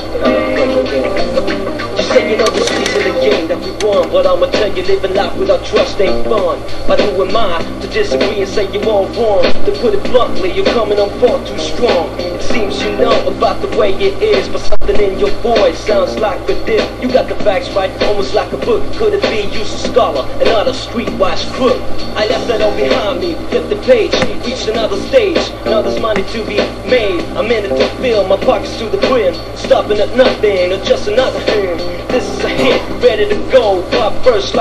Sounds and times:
Background music: 0:00.0 - 0:34.6.

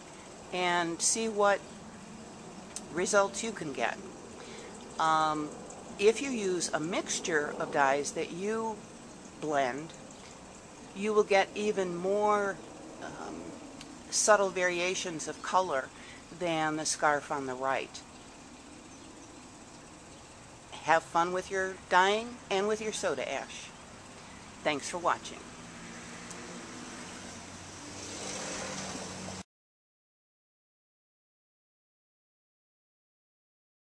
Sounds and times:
Speech: 0:00.6 - 0:01.6, 0:02.8 - 0:04.0, 0:05.0 - 0:08.8, 0:09.4 - 0:09.9, 0:11.0 - 0:13.5, 0:14.1 - 0:18.0, 0:20.8 - 0:23.7, 0:24.6 - 0:25.5.

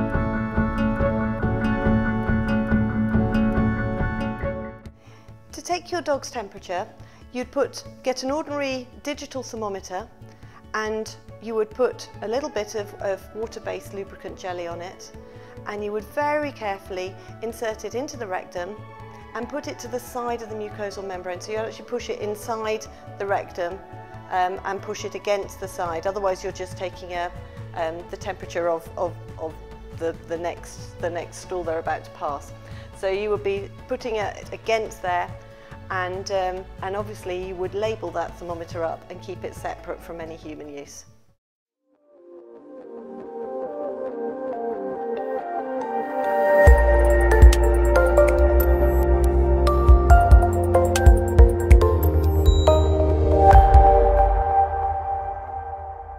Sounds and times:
Music: 0:00.0 - 0:56.1
Speech: 0:05.5 - 0:10.1, 0:10.8 - 0:18.8, 0:19.4 - 0:41.1.

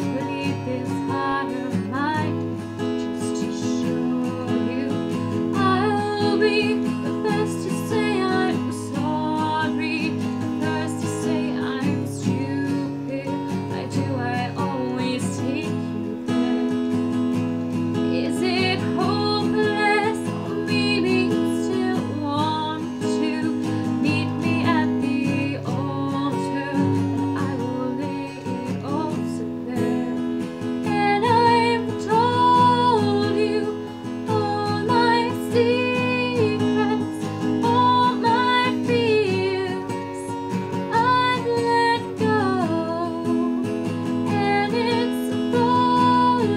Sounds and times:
Female singing: 0:00.0 - 0:16.0, 0:18.1 - 0:46.5
Music: 0:00.0 - 0:46.5.

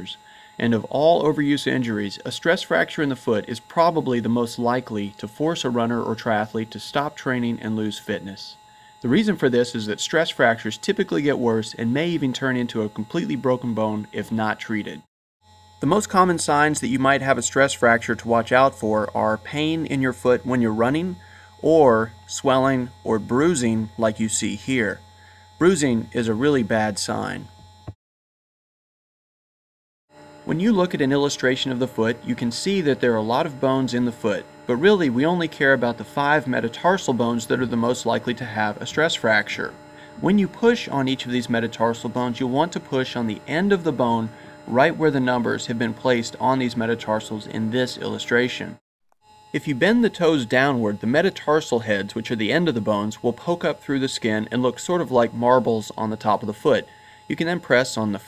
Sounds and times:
Speech: 0:00.0 - 0:15.1, 0:15.8 - 0:25.0, 0:25.6 - 0:27.5, 0:30.5 - 0:48.8, 0:49.6 - 0:58.2.

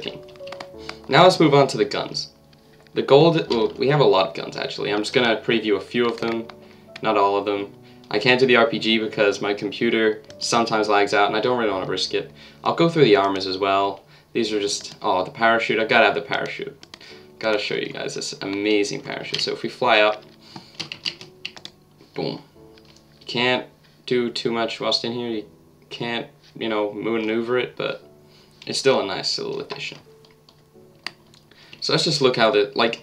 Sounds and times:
Speech: 0:00.0 - 0:00.2, 0:01.1 - 0:02.4, 0:03.0 - 0:16.8, 0:17.4 - 0:20.2, 0:22.2 - 0:22.5, 0:23.3 - 0:28.0, 0:28.7 - 0:30.1, 0:31.8 - 0:33.0
Computer keyboard: 0:00.0 - 0:01.1, 0:06.0 - 0:07.2, 0:16.4 - 0:17.1, 0:18.0 - 0:21.8
Music: 0:00.0 - 0:33.0.

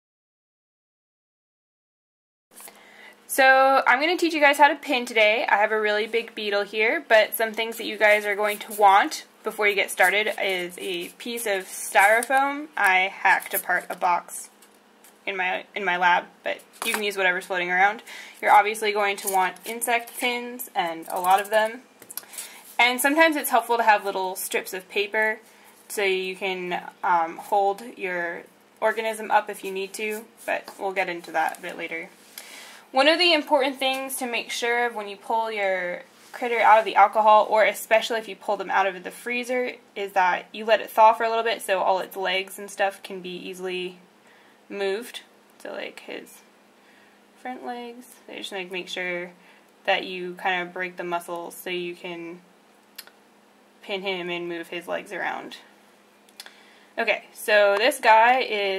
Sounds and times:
Speech: 0:03.3 - 0:14.5, 0:15.3 - 0:21.8, 0:22.8 - 0:32.1, 0:32.9 - 0:44.0, 0:44.7 - 0:46.5, 0:47.4 - 0:52.4, 0:53.8 - 0:55.7, 0:57.0 - 0:58.7.

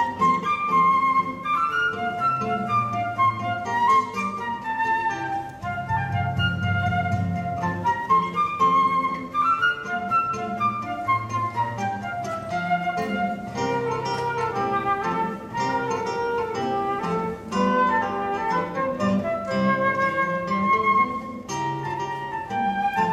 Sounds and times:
Strum: 0:02.4 - 0:09.5.

